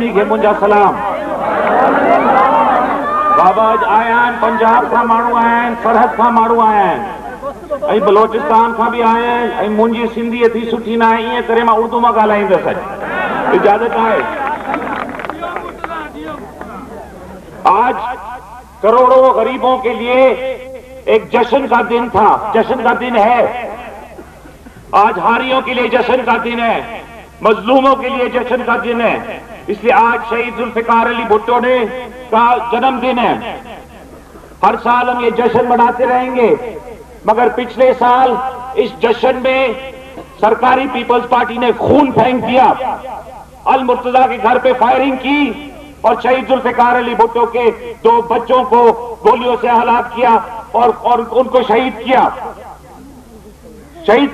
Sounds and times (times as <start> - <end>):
Male speech, man speaking: 0.0 - 1.1, 3.4 - 7.2, 7.8 - 12.9, 13.5 - 14.6, 15.2 - 16.5, 17.6 - 18.2, 18.8 - 20.5, 21.1 - 23.7, 24.9 - 33.6, 34.6 - 43.0, 43.7 - 52.6, 54.0 - 54.3
Narration, monologue: 0.0 - 1.6, 2.3 - 16.8, 17.4 - 53.0.